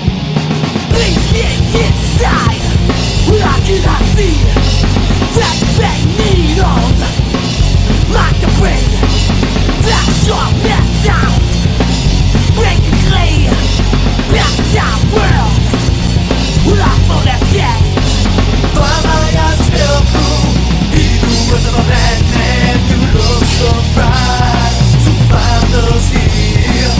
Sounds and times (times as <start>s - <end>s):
Music: 0.0s - 27.0s.